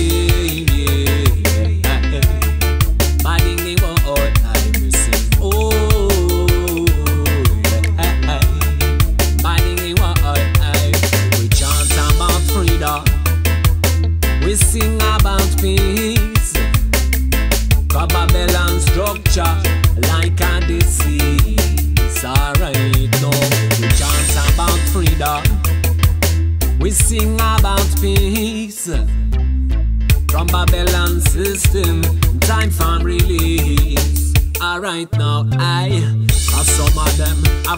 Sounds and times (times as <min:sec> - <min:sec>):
Music: 0:00.0 - 0:37.7.